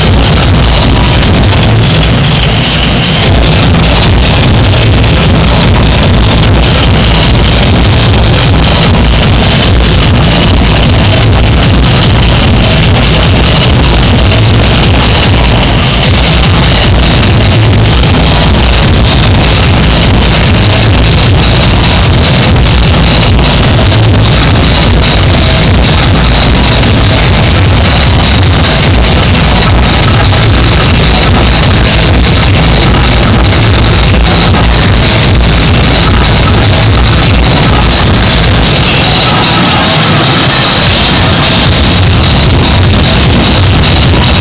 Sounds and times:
Techno: 0:00.0 - 0:44.4.

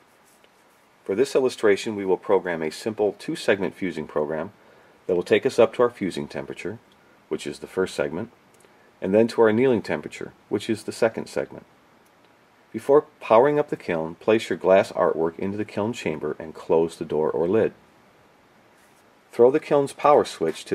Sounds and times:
Speech: 0:01.0 - 0:08.4, 0:09.0 - 0:11.7, 0:12.7 - 0:17.8, 0:19.3 - 0:20.7.

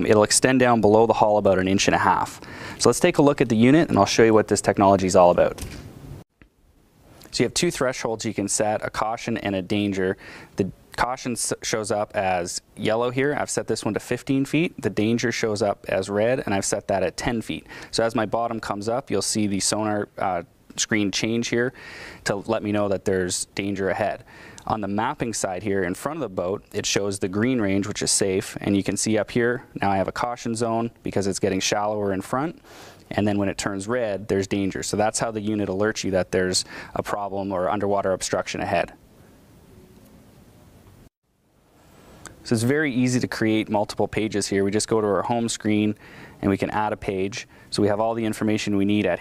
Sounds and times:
Speech: 0:00.0 - 0:05.6, 0:07.3 - 0:39.0, 0:42.4 - 0:49.2.

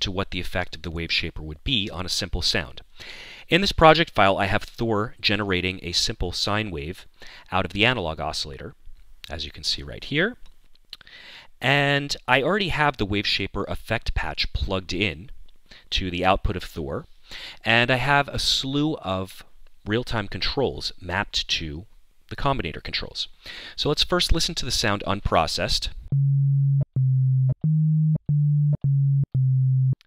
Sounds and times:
Speech: 0:00.0 - 0:02.9, 0:03.5 - 0:10.4, 0:11.6 - 0:15.3, 0:15.9 - 0:26.0
Electronic music: 0:26.1 - 0:30.0.

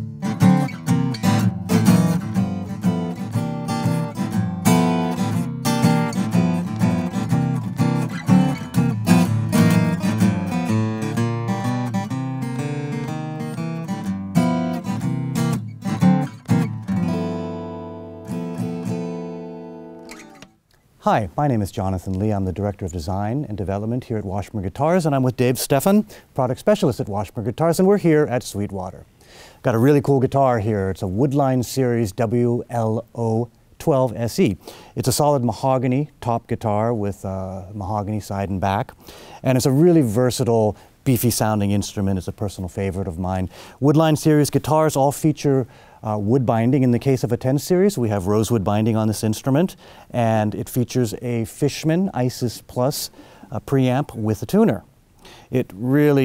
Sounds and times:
Guitar: 0:00.0 - 0:21.2
Speech: 0:21.0 - 0:54.9, 0:55.5 - 0:56.2.

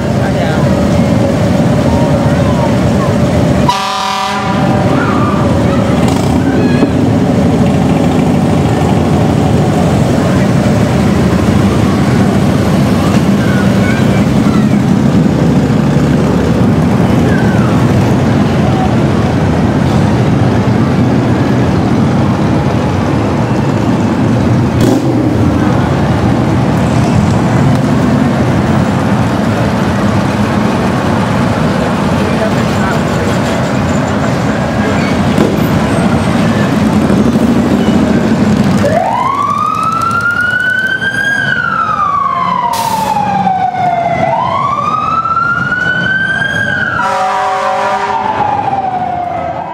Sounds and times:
Truck: 0:00.0 - 0:49.7.

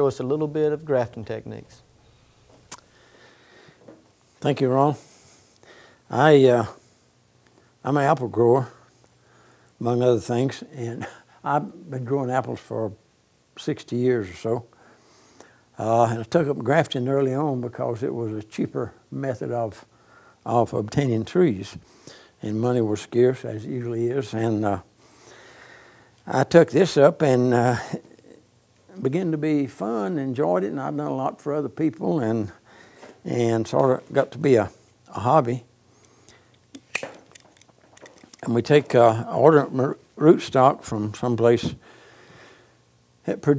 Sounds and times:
Speech: 0:00.0 - 0:01.8, 0:04.4 - 0:05.0, 0:06.1 - 0:06.8, 0:07.8 - 0:08.9, 0:09.8 - 0:13.0, 0:13.6 - 0:14.7, 0:15.8 - 0:21.8, 0:22.4 - 0:24.9, 0:26.2 - 0:32.6, 0:33.2 - 0:35.7, 0:38.4 - 0:41.8, 0:43.2 - 0:43.5.

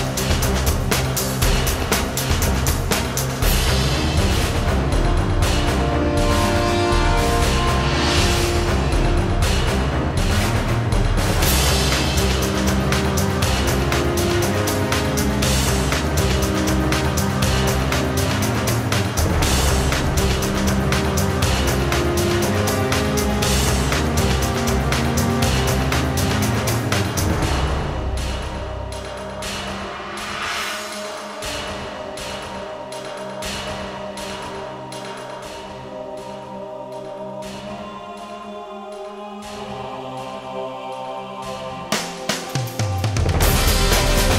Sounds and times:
Music: 0:00.0 - 0:44.3.

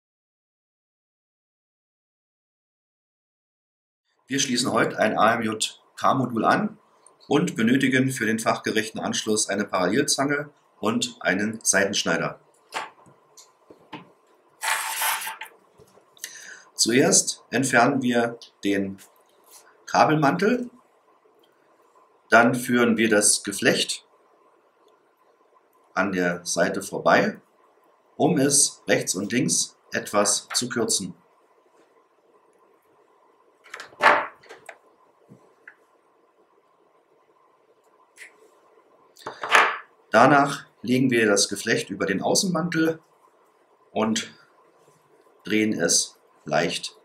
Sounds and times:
Speech: 0:04.3 - 0:12.4, 0:16.8 - 0:19.1, 0:19.9 - 0:20.8, 0:22.3 - 0:24.1, 0:26.0 - 0:27.5, 0:28.2 - 0:31.2, 0:40.1 - 0:43.0, 0:43.9 - 0:44.4, 0:45.4 - 0:47.0.

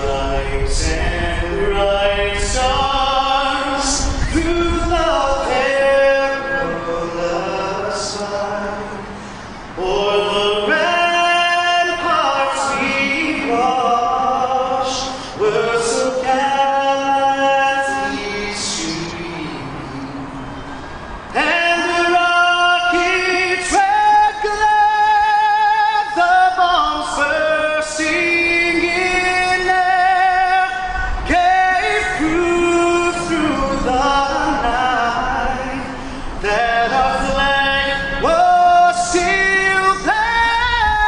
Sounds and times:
Male singing: 0:00.0 - 0:09.2, 0:09.8 - 0:20.2, 0:21.3 - 0:41.0.

